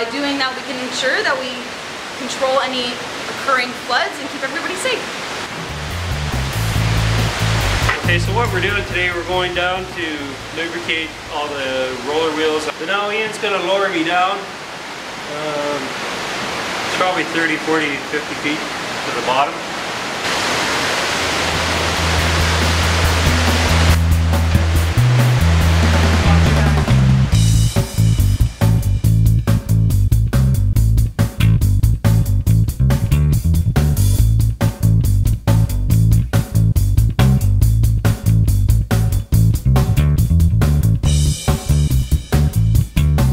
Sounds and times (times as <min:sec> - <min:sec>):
Speech: 0:00.0 - 0:05.0, 0:08.0 - 0:14.5, 0:15.3 - 0:15.9, 0:16.9 - 0:19.6, 0:26.2 - 0:26.9.